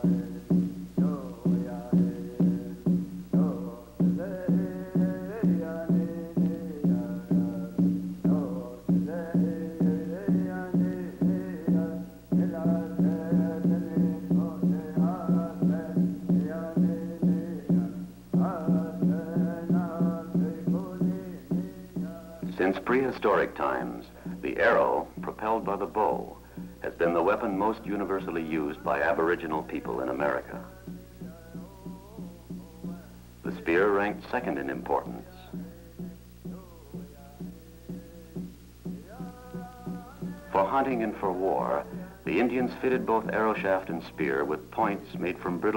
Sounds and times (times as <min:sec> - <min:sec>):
Music: 0:00.0 - 0:45.7
Speech: 0:22.5 - 0:30.7, 0:33.5 - 0:35.5, 0:40.5 - 0:45.7.